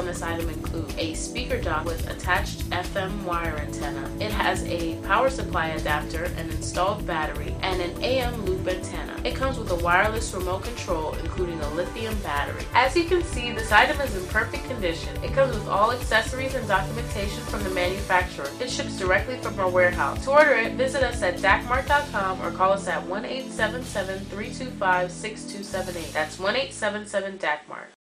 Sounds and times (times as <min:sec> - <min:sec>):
Music: 0:00.0 - 0:28.0
Speech: 0:00.0 - 0:28.0.